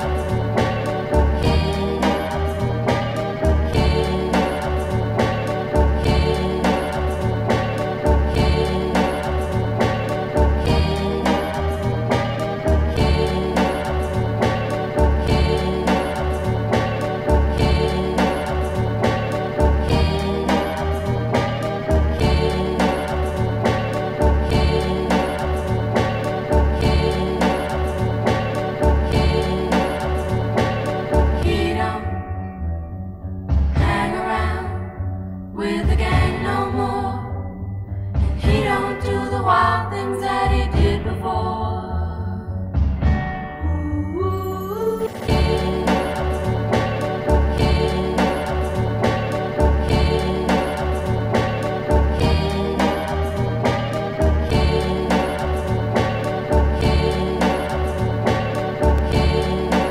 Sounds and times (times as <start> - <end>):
Soundtrack music: 0.0 - 44.2, 45.0 - 59.9.